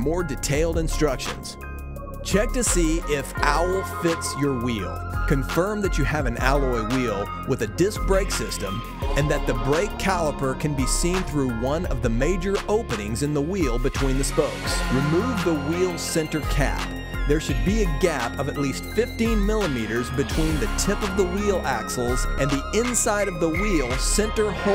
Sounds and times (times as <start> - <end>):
Speech: 0.0 - 1.6, 2.2 - 24.7
Music: 0.0 - 24.7.